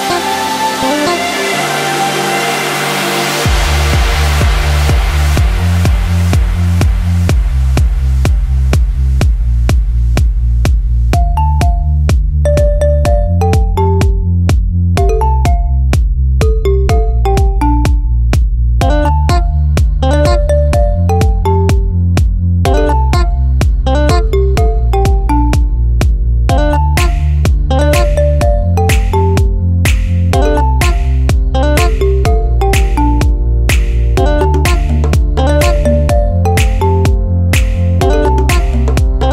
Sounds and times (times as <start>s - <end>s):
House music: 0.0s - 39.3s.